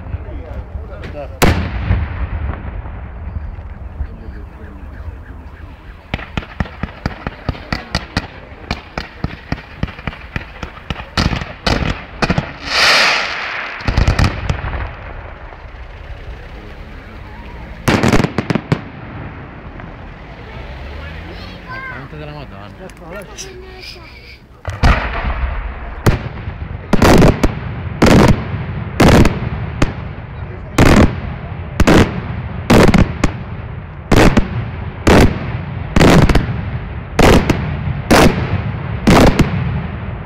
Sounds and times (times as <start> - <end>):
Fireworks: 0.0 - 4.2, 6.0 - 20.5, 23.0 - 40.2.